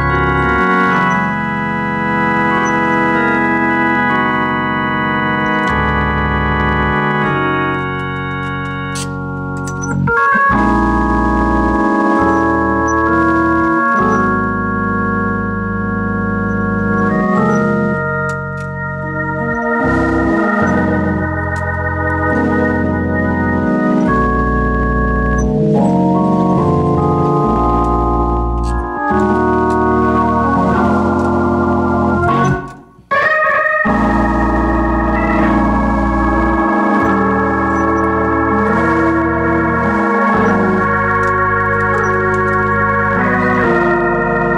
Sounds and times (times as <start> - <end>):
Hammond organ: 0.0 - 44.5.